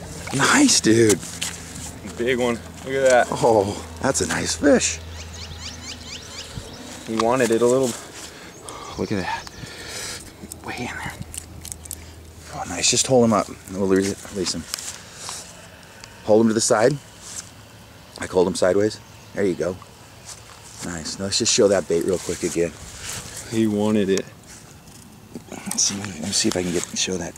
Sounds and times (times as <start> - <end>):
Speech: 2.0 - 5.0, 7.1 - 8.0, 18.2 - 19.8, 20.8 - 22.8, 23.5 - 24.3, 25.6 - 27.3.